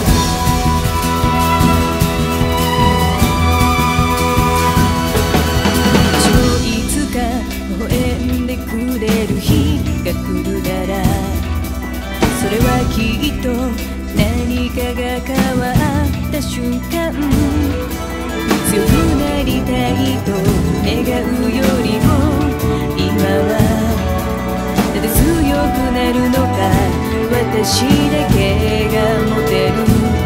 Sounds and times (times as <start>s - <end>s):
Music: 0.0s - 30.2s.